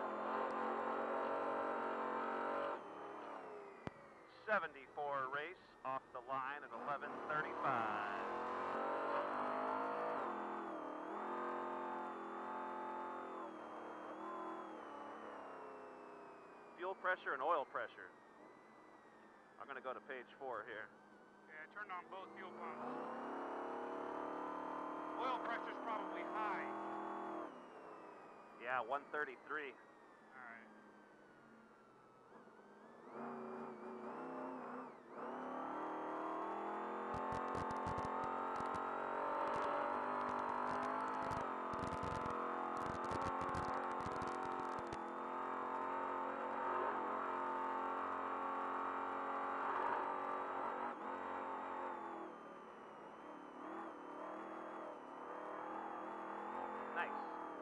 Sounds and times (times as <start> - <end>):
Vehicle: 0.0 - 57.6
Speech: 4.3 - 8.3, 16.8 - 18.1, 19.6 - 20.9, 21.5 - 22.8, 25.2 - 26.7, 28.6 - 29.8, 30.4 - 30.7, 57.0 - 57.2.